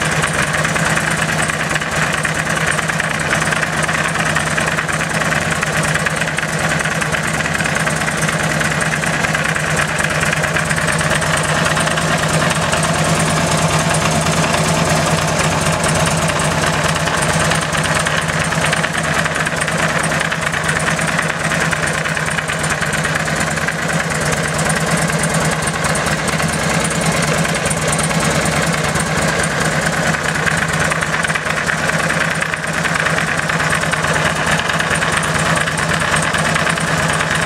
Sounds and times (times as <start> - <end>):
Vibration: 0.0 - 37.4.